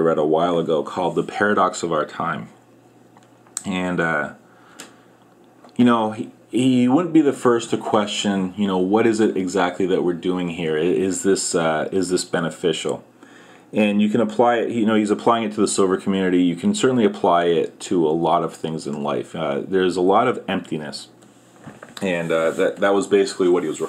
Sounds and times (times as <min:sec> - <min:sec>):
Speech: 0:00.0 - 0:02.6, 0:03.6 - 0:04.4, 0:05.7 - 0:13.1, 0:13.7 - 0:21.2, 0:22.0 - 0:23.8.